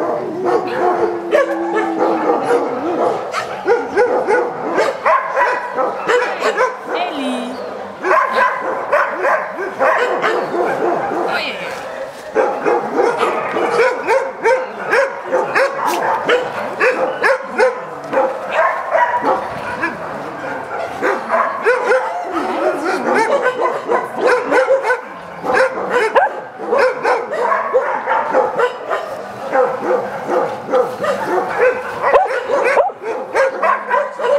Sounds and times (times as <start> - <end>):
Bark: 0.0 - 7.0, 8.0 - 34.3
Canidae, dogs, wolves: 0.0 - 34.3.